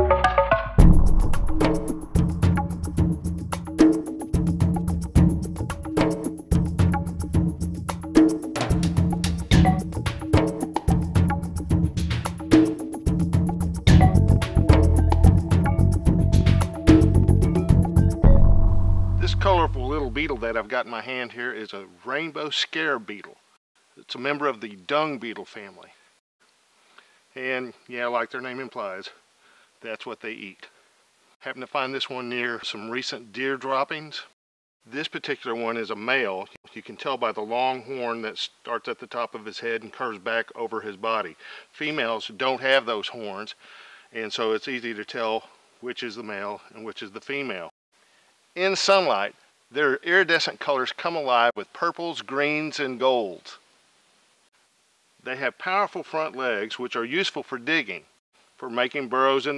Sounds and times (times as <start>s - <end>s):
Speech: 19.2s - 23.4s, 24.0s - 26.0s, 27.4s - 29.2s, 29.8s - 30.7s, 31.4s - 43.6s, 44.2s - 47.7s, 48.6s - 53.6s, 55.2s - 59.5s.